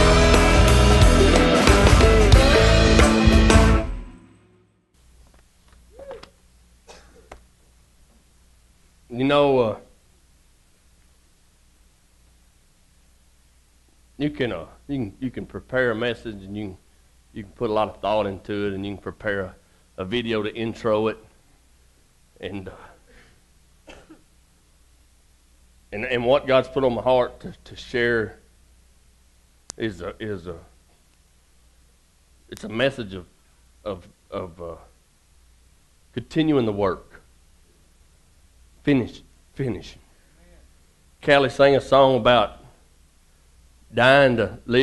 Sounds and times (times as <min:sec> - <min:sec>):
Speech: 0:09.1 - 0:10.0, 0:14.2 - 0:16.8, 0:17.4 - 0:21.3, 0:22.4 - 0:23.0, 0:25.9 - 0:28.5, 0:29.8 - 0:30.8, 0:32.5 - 0:35.0, 0:36.2 - 0:37.3, 0:38.8 - 0:42.8, 0:43.9 - 0:44.8.